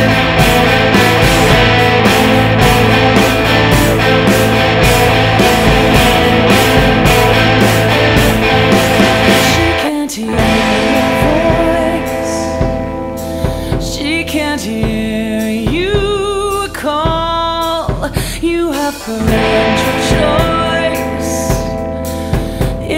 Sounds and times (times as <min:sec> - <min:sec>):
Electric guitar: 0:00.0 - 0:22.9.